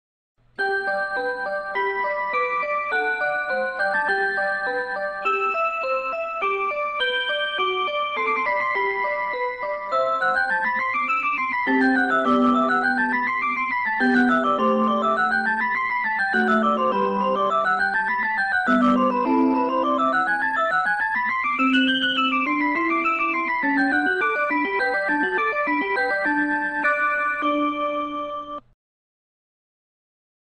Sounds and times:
Music: 0.4s - 28.8s.

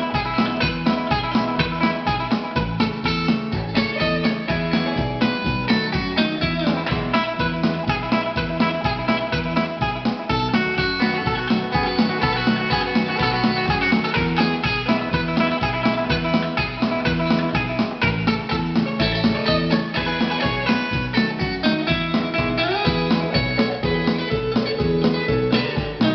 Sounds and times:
Acoustic guitar: 0.0s - 26.1s
Bass guitar: 0.0s - 26.1s
Strum: 0.0s - 26.1s.

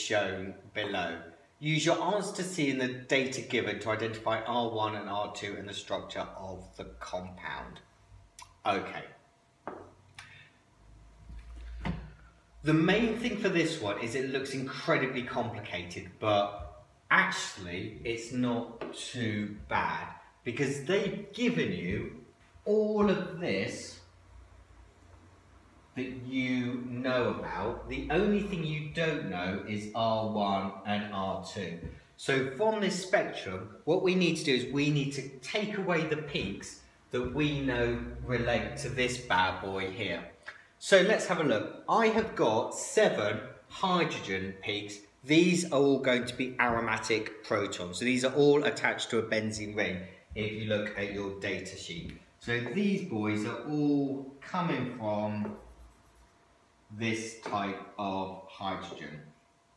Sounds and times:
Speech: 0.0s - 9.2s, 12.6s - 24.1s, 26.0s - 55.7s, 56.9s - 59.4s.

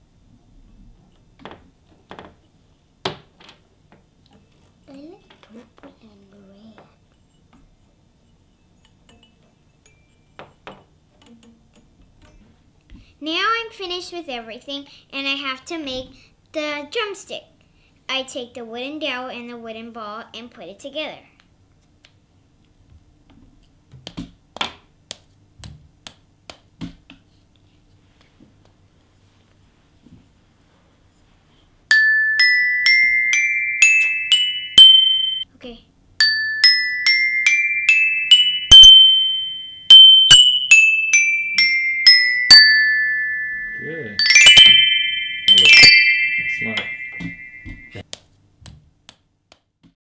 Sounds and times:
Marimba, xylophone: 31.9s - 35.4s, 36.2s - 48.0s.

